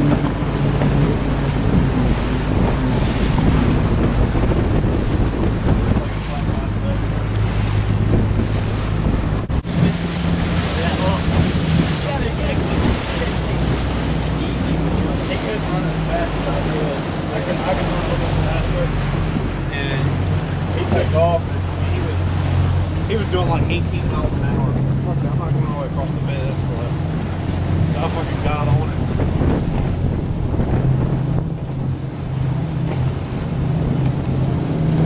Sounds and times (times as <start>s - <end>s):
Motorboat, speedboat: 0.0s - 35.0s
Speech: 6.0s - 7.1s, 10.7s - 19.0s, 19.7s - 22.2s, 23.1s - 26.9s, 27.9s - 29.0s.